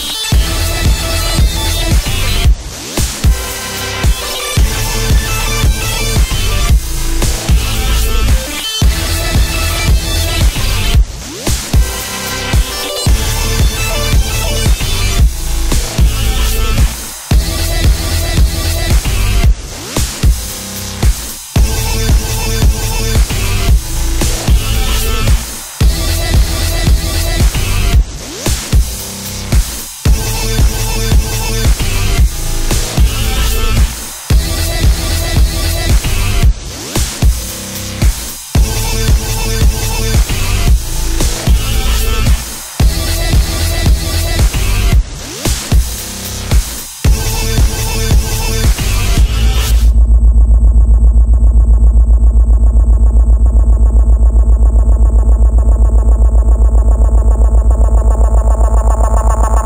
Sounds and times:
Music: 0:00.0 - 0:50.0.

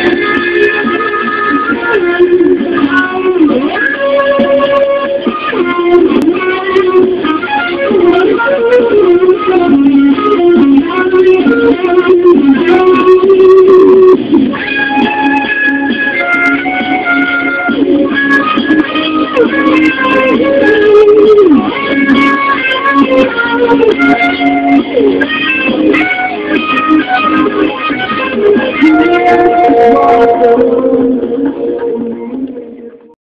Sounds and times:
Acoustic guitar: 0:00.0 - 0:33.1.

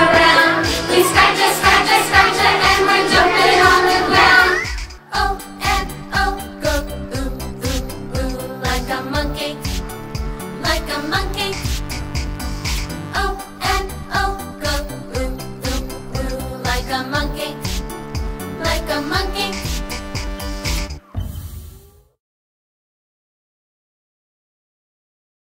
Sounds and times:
Sound effect: 0:00.0 - 0:05.0, 0:20.7 - 0:22.2
Music: 0:00.0 - 0:22.2.

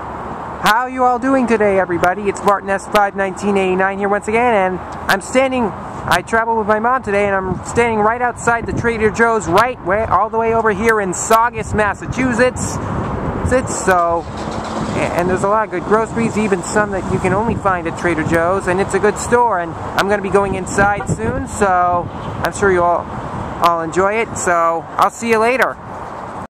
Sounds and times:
Speech: 0:00.6 - 0:12.8, 0:13.5 - 0:14.3, 0:14.9 - 0:25.8.

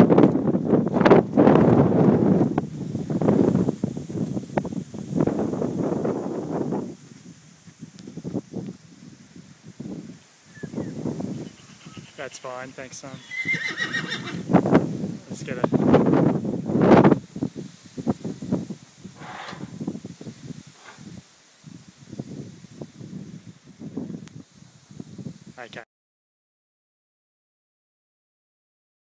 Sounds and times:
Speech: 0:12.2 - 0:13.3, 0:15.2 - 0:15.8, 0:25.6 - 0:25.9.

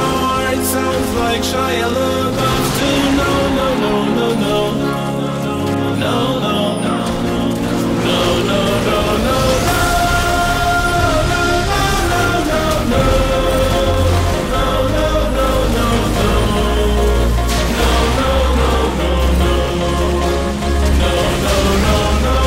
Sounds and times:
Music: 0:00.0 - 0:22.4.

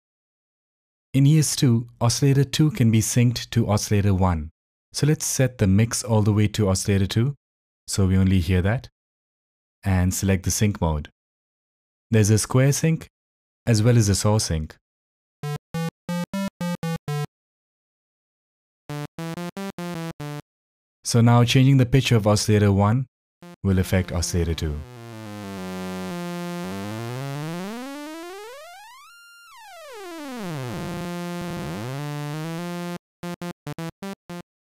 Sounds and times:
Speech: 0:01.2 - 0:08.9, 0:09.9 - 0:11.1, 0:12.1 - 0:13.1, 0:13.7 - 0:14.8, 0:21.1 - 0:23.1, 0:23.7 - 0:24.8.

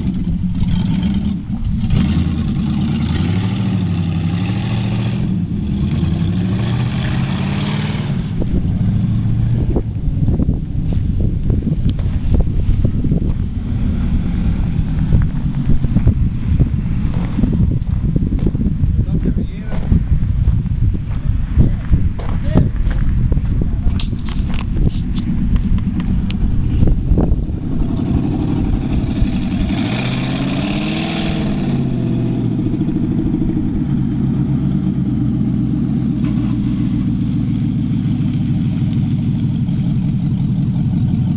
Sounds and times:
Speech: 0:19.0 - 0:19.9, 0:21.6 - 0:22.8.

